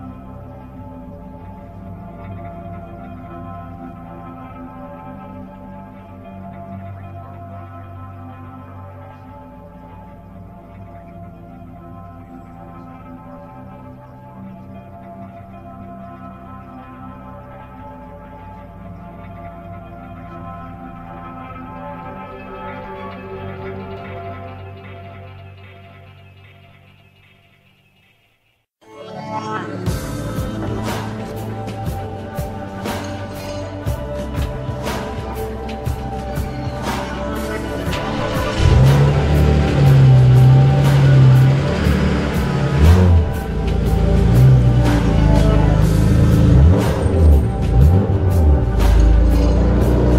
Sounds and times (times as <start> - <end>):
Music: 0.0 - 50.1.